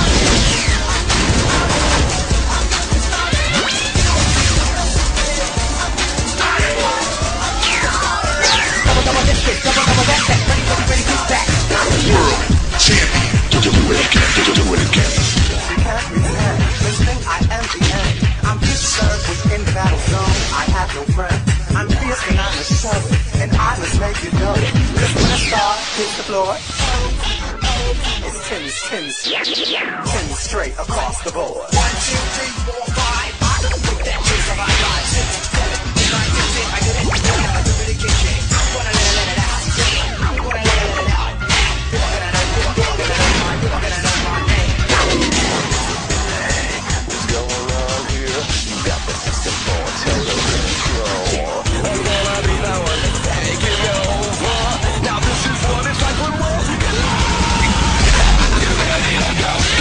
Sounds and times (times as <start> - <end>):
Music: 0.0 - 59.8.